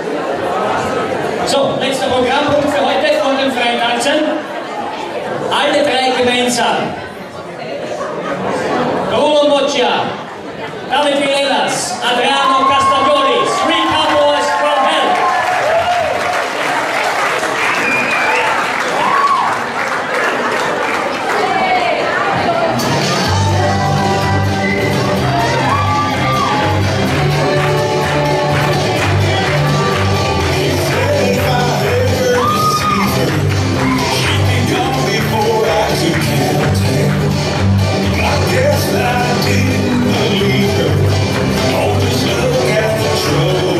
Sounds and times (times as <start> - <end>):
Speech: 1.4 - 4.4, 10.9 - 15.2.